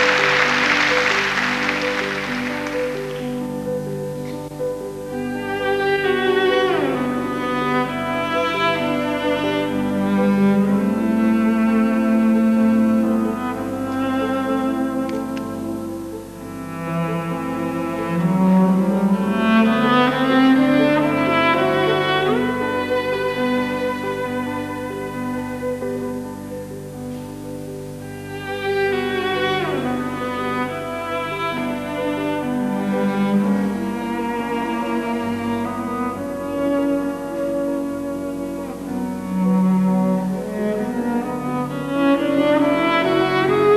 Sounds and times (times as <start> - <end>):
Music: 0.0 - 43.7.